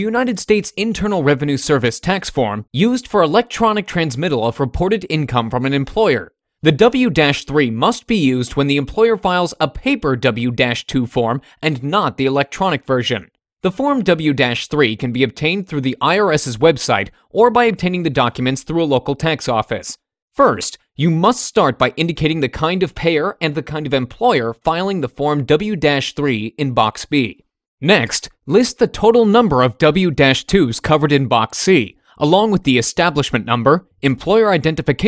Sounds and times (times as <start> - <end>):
Speech: 0.0 - 35.0.